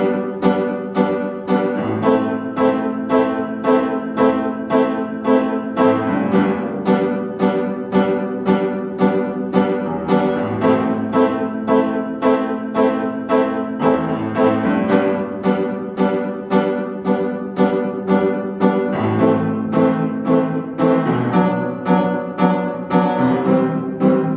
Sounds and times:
Piano: 0.0 - 24.3.

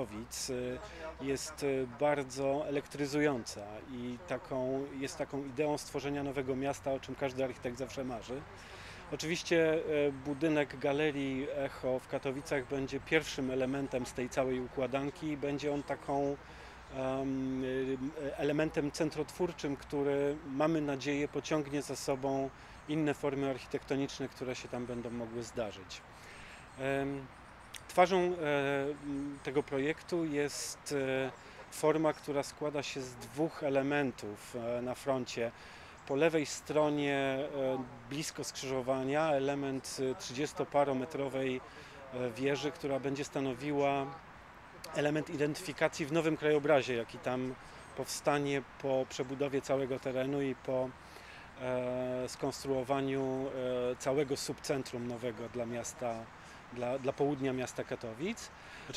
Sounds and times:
Speech: 0.0 - 26.0, 26.7 - 51.0, 51.6 - 58.9.

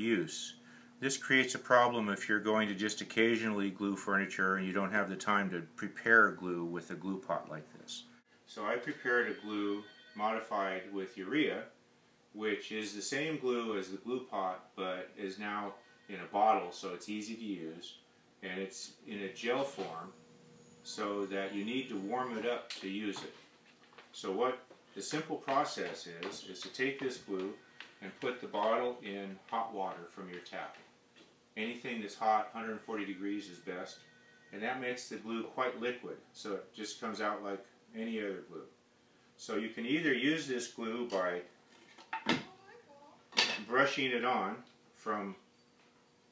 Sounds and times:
Speech: 0.0 - 11.8, 12.4 - 20.1, 20.9 - 23.4, 24.2 - 30.8, 31.6 - 34.0, 34.6 - 38.7, 39.4 - 41.5, 43.6 - 45.4.

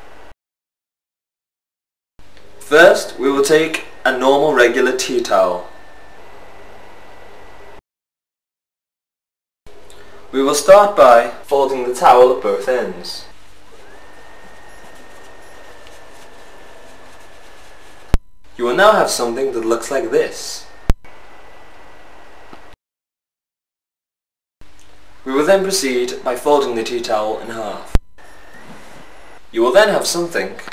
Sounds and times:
Speech: 2.6 - 5.7, 10.3 - 13.3, 18.6 - 20.7, 25.2 - 28.0, 29.5 - 30.7.

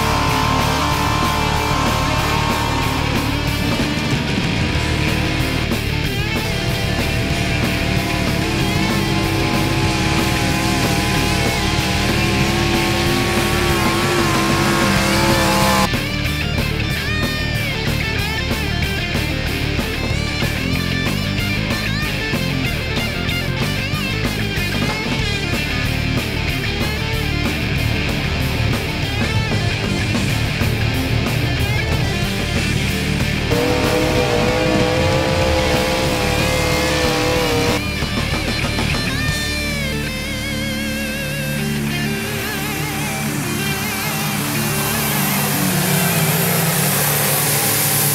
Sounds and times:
Music: 0.0 - 48.1.

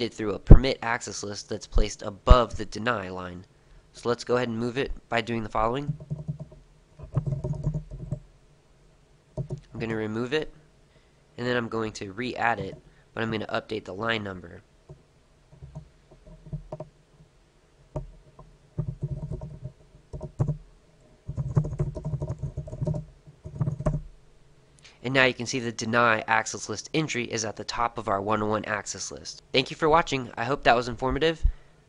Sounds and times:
Computer keyboard: 5.8 - 8.2, 9.4 - 9.7, 18.8 - 20.6, 21.3 - 24.0.

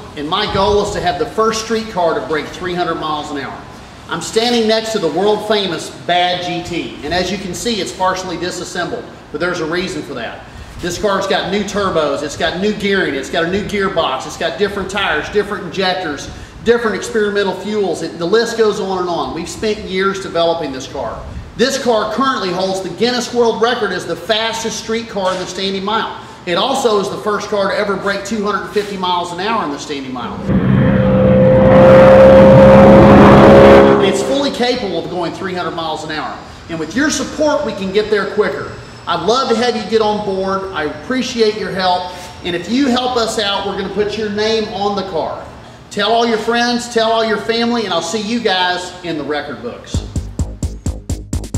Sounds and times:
Speech: 0.0 - 30.4, 34.0 - 50.1.

